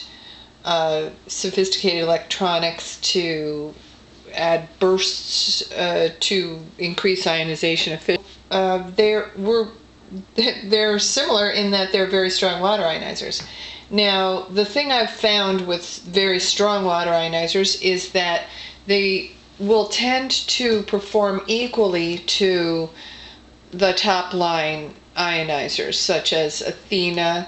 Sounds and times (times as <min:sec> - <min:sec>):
Speech: 0:00.7 - 0:23.0, 0:23.8 - 0:27.4.